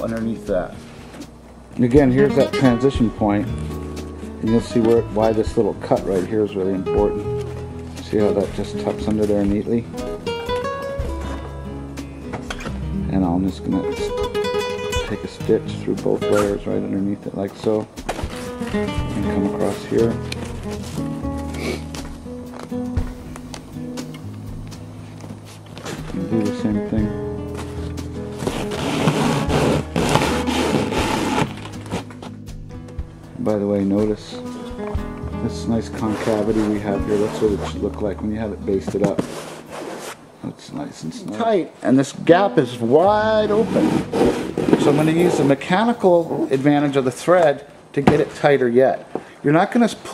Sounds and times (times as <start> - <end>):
Speech: 0.0 - 0.8, 1.8 - 3.5, 4.4 - 7.3, 8.0 - 9.9, 13.0 - 14.2, 15.0 - 17.9, 19.1 - 20.2, 26.2 - 27.1, 33.4 - 34.4, 35.4 - 39.3, 40.4 - 44.0, 44.8 - 50.1
Mandolin: 2.0 - 11.6, 12.3 - 17.2.